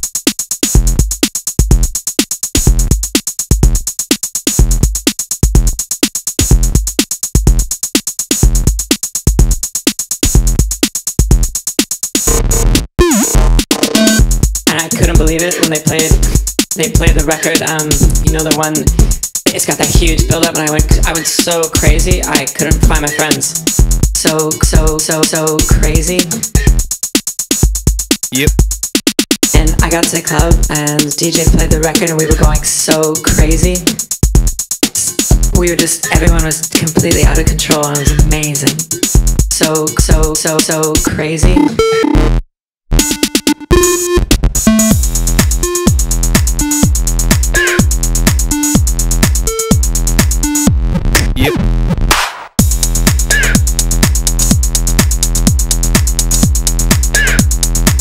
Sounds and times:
Music: 0:00.0 - 0:42.4, 0:43.0 - 0:58.0.

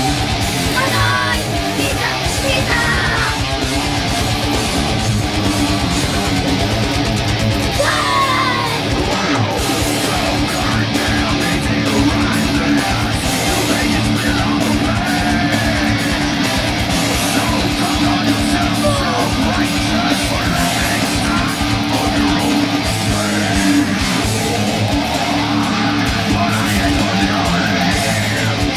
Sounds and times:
Electric guitar: 0:00.0 - 0:28.7.

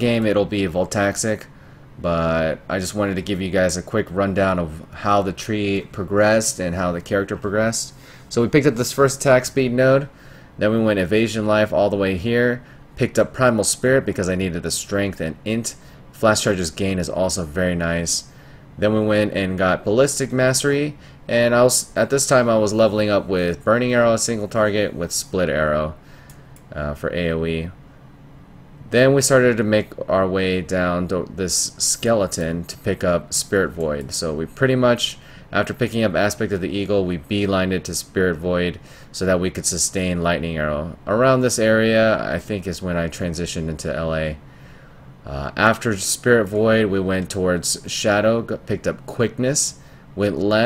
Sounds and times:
Speech: 0:00.0 - 0:26.0, 0:26.7 - 0:27.8, 0:28.9 - 0:44.4, 0:45.2 - 0:50.6.

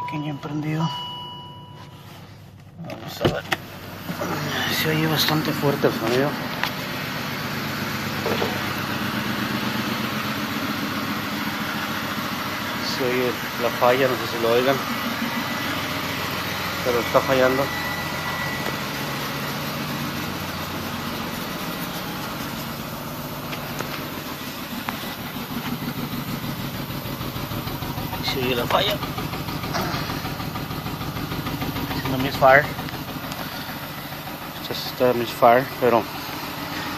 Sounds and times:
Car: 0:00.0 - 0:36.9
Idling: 0:00.0 - 0:36.9
Medium engine (mid frequency): 0:00.0 - 0:36.9.

